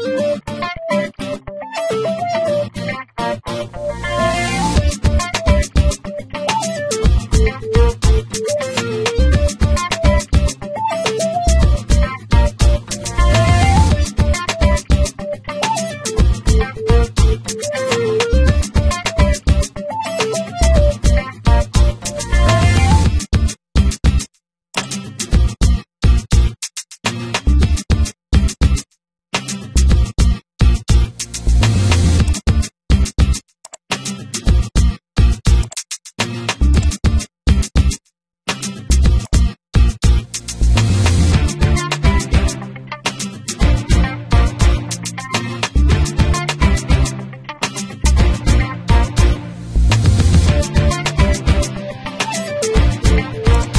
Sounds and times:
Music: 0.0 - 24.2, 24.8 - 28.8, 29.4 - 53.7.

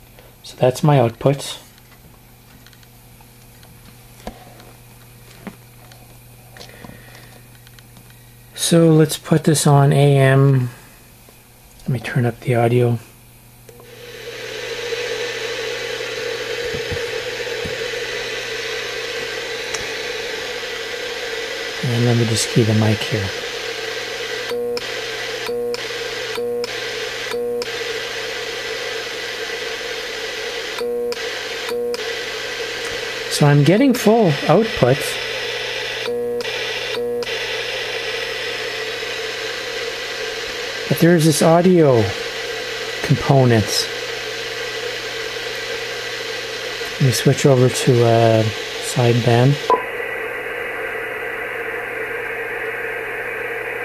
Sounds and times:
Speech: 0.4 - 1.7, 8.6 - 10.8, 11.8 - 13.1, 21.8 - 23.4, 33.3 - 35.2, 40.9 - 42.2, 43.0 - 43.9, 47.0 - 49.7
Radio: 13.7 - 53.8.

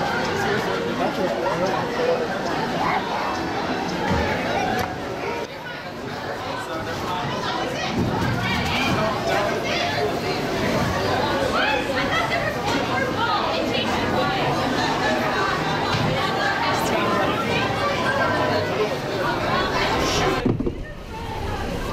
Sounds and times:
Speech: 0.0 - 21.9.

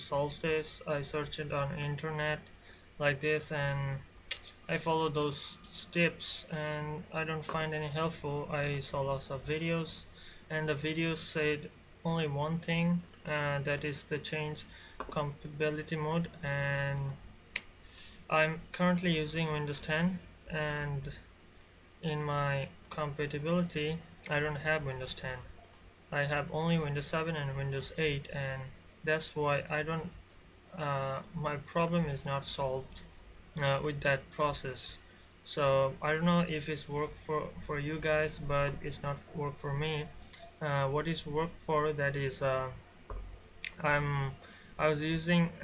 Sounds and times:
Speech: 0.0 - 4.1, 4.7 - 17.2, 18.3 - 21.3, 22.0 - 25.5, 26.2 - 30.2, 30.8 - 42.8, 43.7 - 45.6.

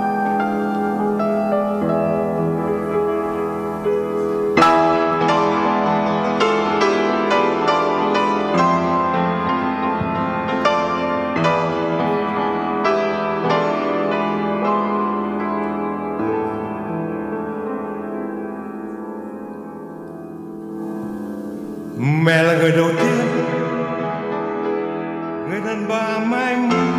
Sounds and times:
Music: 0.0 - 26.9.

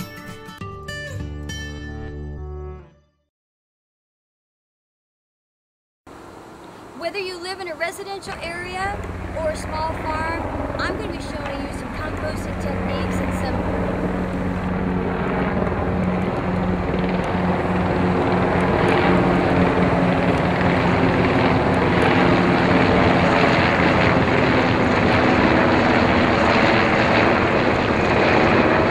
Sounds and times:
Helicopter: 6.1 - 28.9
Outside, rural or natural: 6.1 - 28.9
Speech: 7.0 - 13.7.

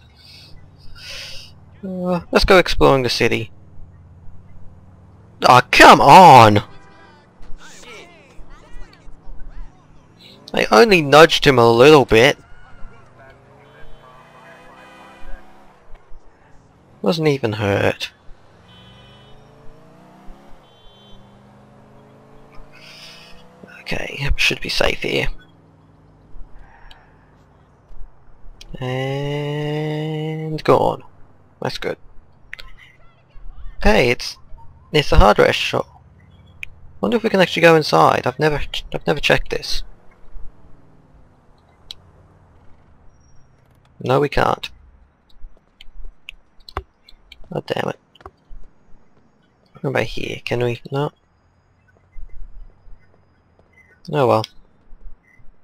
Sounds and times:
Car: 0.0 - 55.6
Speech: 1.8 - 3.5, 5.4 - 9.9, 10.5 - 12.4, 17.0 - 18.1, 23.7 - 25.4, 28.6 - 32.0, 32.6 - 35.8, 37.0 - 39.8, 44.0 - 44.7, 47.5 - 48.0, 49.8 - 51.1, 54.1 - 54.5.

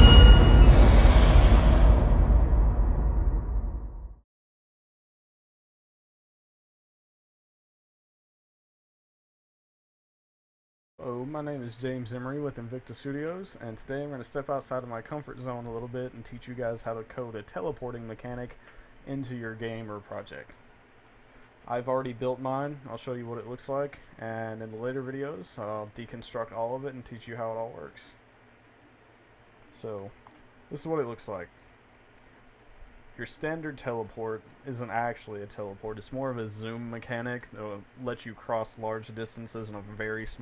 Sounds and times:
Speech: 11.0 - 20.6, 21.7 - 28.2, 29.7 - 31.5, 33.2 - 40.4.

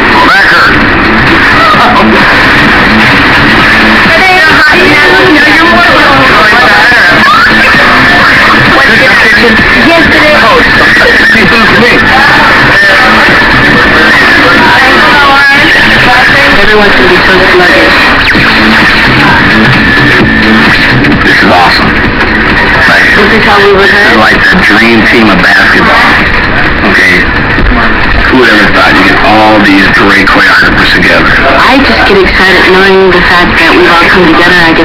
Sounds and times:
Speech: 0.0 - 0.8, 1.6 - 2.2, 4.1 - 18.1, 21.2 - 21.9, 22.8 - 26.2, 26.8 - 34.8.

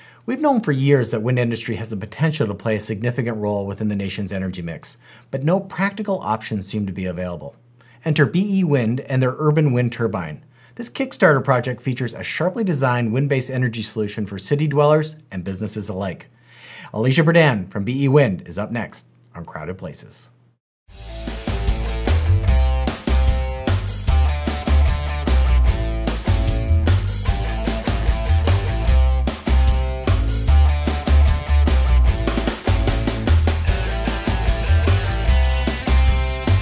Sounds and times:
Music: 20.9 - 36.6.

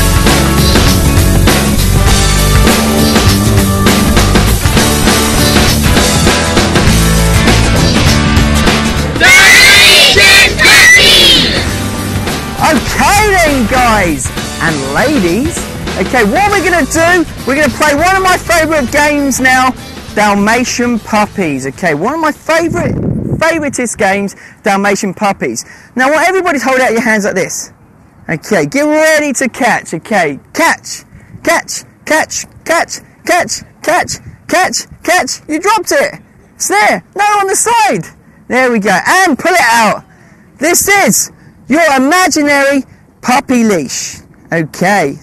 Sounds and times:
Music: 0.0 - 22.4
Speech: 12.6 - 27.7, 28.3 - 45.2.

